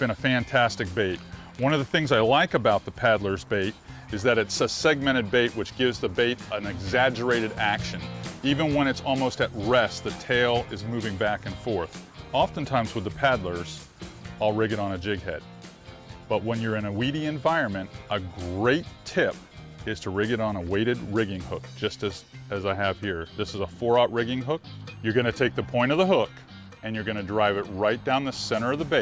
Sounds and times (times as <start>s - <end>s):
Speech: 0.0s - 13.8s, 14.4s - 15.4s, 16.3s - 29.0s
Music: 0.0s - 29.0s.